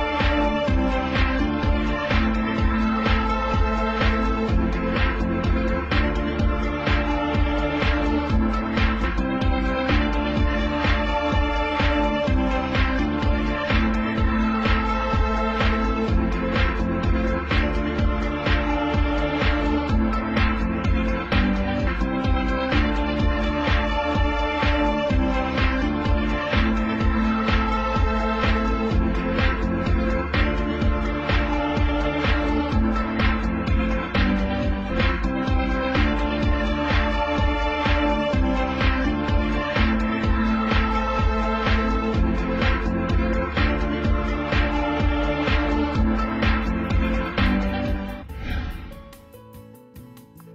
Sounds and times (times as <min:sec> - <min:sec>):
Music: 0:00.0 - 0:50.5.